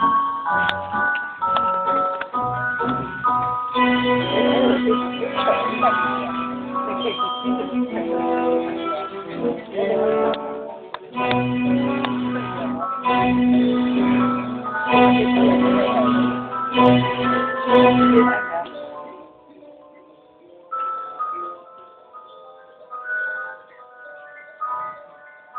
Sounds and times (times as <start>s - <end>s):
Music: 0.0s - 25.5s
Speech: 4.2s - 16.5s, 17.7s - 22.8s.